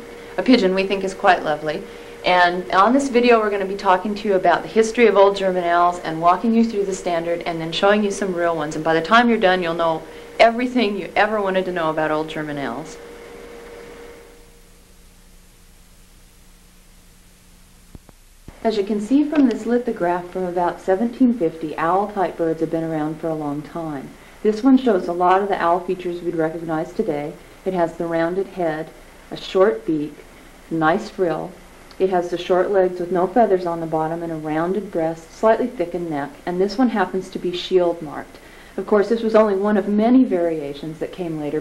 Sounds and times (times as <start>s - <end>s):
Speech: 0.4s - 13.0s, 18.6s - 41.6s.